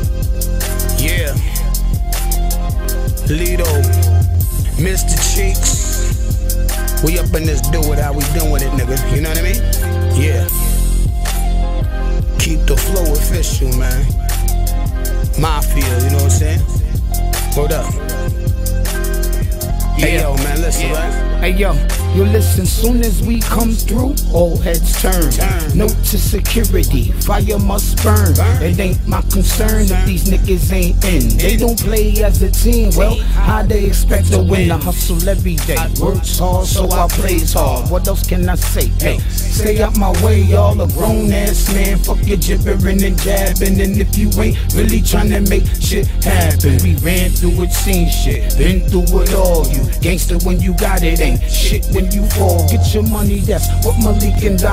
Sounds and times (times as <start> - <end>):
Funk: 0.0 - 21.2, 21.8 - 54.7
Independent music: 0.0 - 54.7.